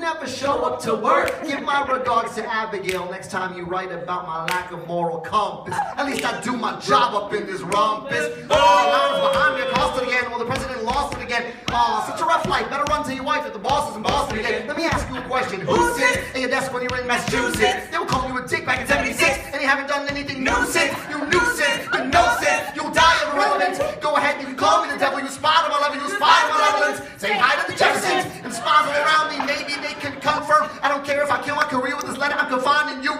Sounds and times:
Rapping: 0.0s - 33.1s.

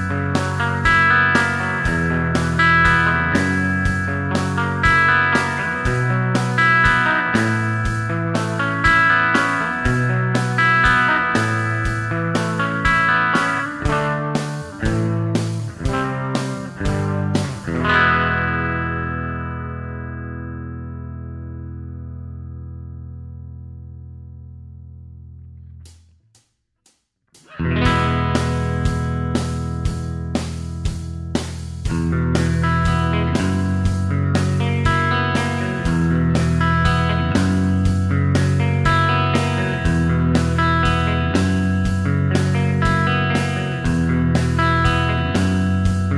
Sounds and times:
Guitar: 0.0s - 26.0s, 27.4s - 46.1s.

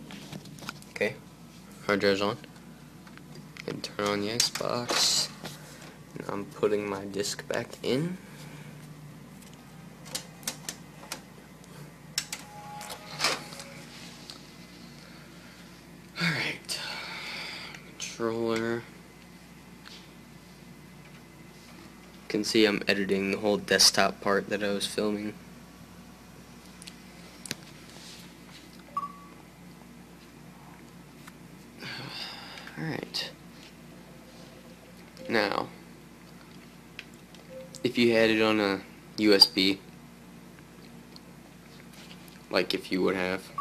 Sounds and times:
Speech: 1.8s - 2.5s, 3.6s - 5.4s, 6.2s - 8.2s, 18.0s - 18.9s, 22.3s - 25.4s, 32.8s - 33.4s, 37.8s - 39.8s, 42.5s - 43.6s.

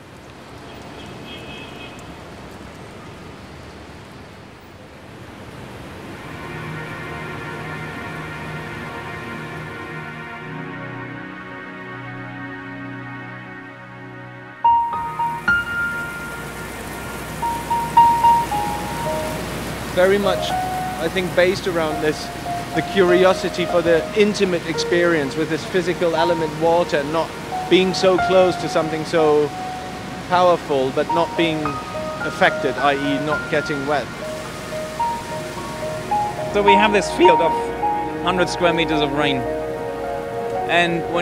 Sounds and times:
Music: 6.2s - 41.2s
Speech: 20.0s - 29.5s, 30.3s - 34.1s, 36.5s - 39.5s, 40.7s - 41.2s.

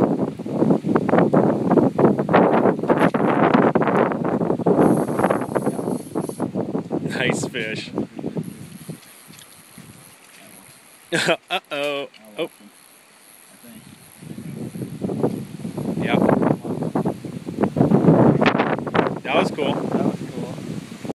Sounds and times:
Speech: 19.3s - 20.6s.

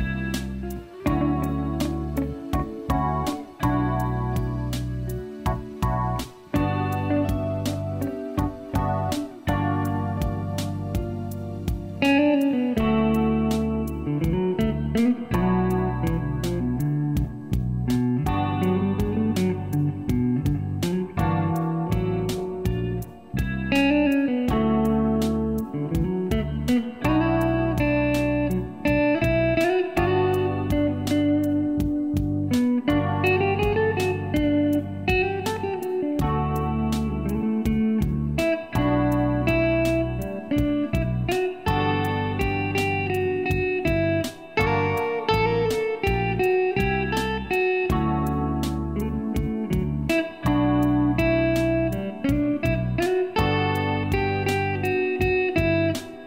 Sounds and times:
Music: 0.0s - 56.2s.

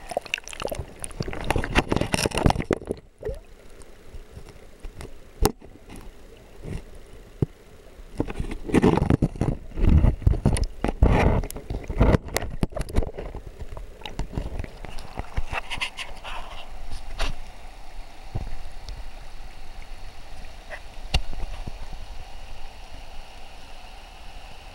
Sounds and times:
Stream: 0.0s - 24.7s.

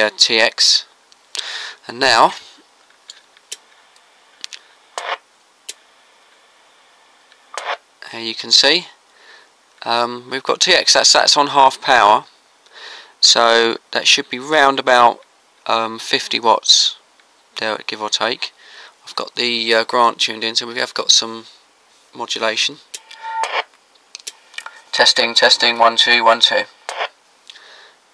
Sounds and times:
Speech: 0.0s - 0.9s, 1.8s - 2.6s, 8.0s - 9.0s, 9.8s - 12.3s, 13.2s - 17.0s, 17.6s - 22.9s, 24.9s - 26.7s.

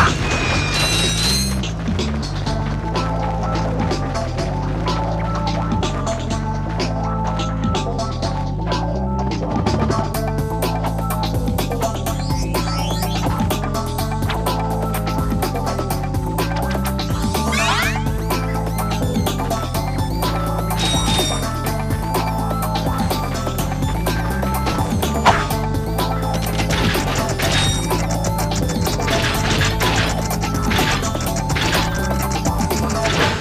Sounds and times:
Music: 0.0s - 33.4s.

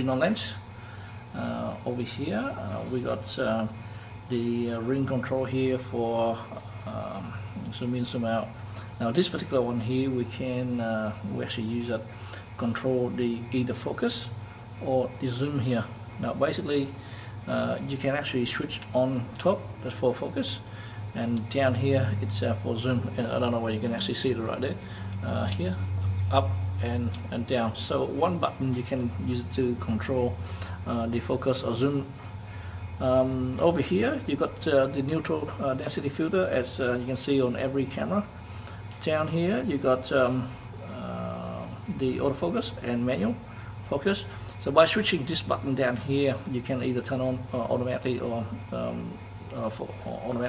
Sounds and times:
Speech: 0.0s - 0.7s, 1.3s - 32.2s, 33.0s - 38.4s, 39.0s - 50.4s.

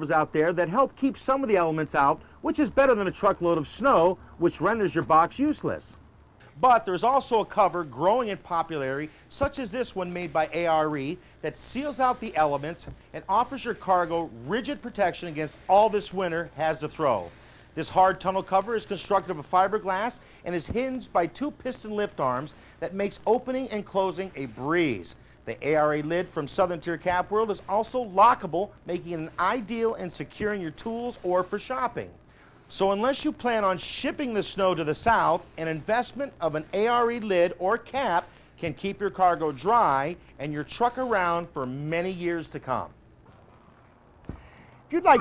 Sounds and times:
Speech: 0.0s - 43.0s, 44.9s - 45.2s.

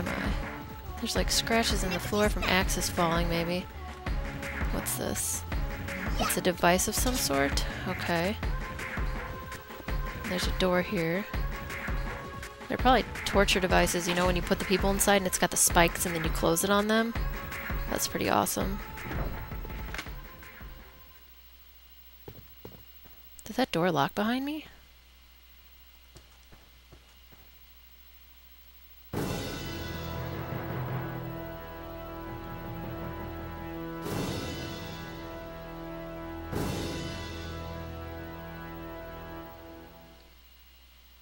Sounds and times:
Music: 0.0s - 21.5s, 29.1s - 40.5s
Speech: 1.0s - 3.6s, 4.7s - 5.4s, 6.1s - 8.4s, 10.3s - 11.3s, 12.7s - 17.2s, 17.9s - 18.8s, 23.4s - 24.8s.

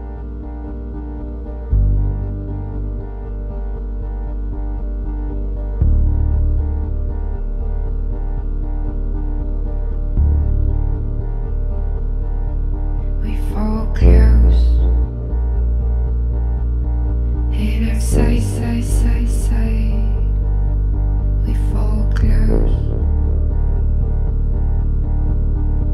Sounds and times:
Music: 0.0s - 25.9s.

